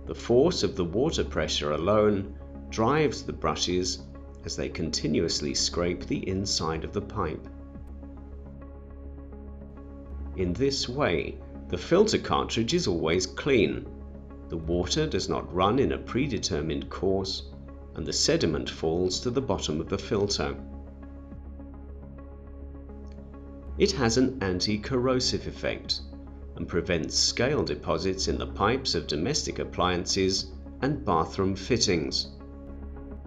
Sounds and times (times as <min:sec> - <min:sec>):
Speech: 0:00.1 - 0:07.5, 0:10.4 - 0:13.9, 0:14.5 - 0:20.6, 0:23.8 - 0:26.0, 0:26.6 - 0:32.3.